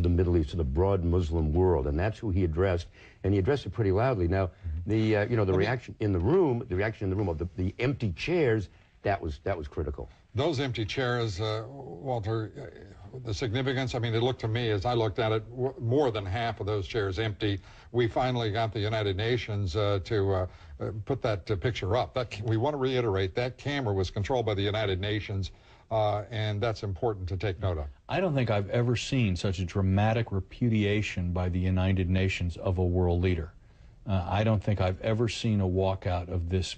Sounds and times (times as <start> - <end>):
Male speech, man speaking: 0.0 - 36.7.